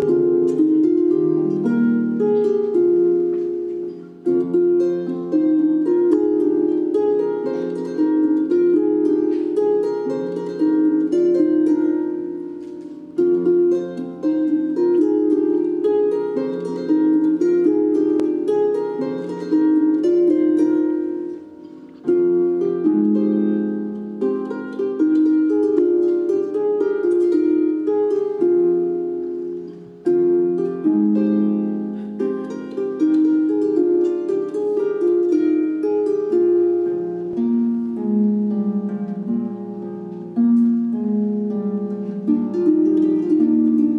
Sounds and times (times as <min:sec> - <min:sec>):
Harp: 0:00.0 - 0:43.9
Plucked string instrument: 0:00.0 - 0:43.9.